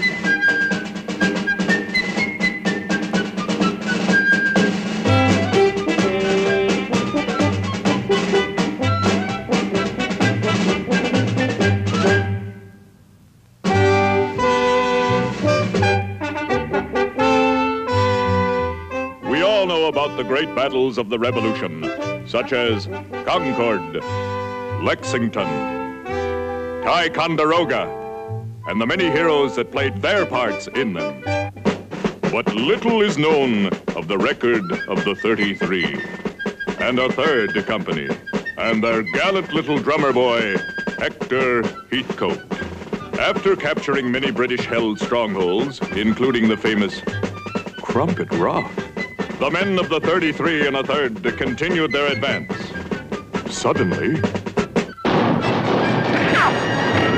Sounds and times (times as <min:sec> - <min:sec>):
Speech: 0:19.2 - 0:24.1, 0:24.8 - 0:25.7, 0:26.8 - 0:27.9, 0:28.7 - 0:31.2, 0:32.3 - 0:36.0, 0:36.8 - 0:42.4, 0:43.2 - 0:47.1, 0:47.8 - 0:48.8, 0:49.4 - 0:52.8, 0:53.5 - 0:54.3.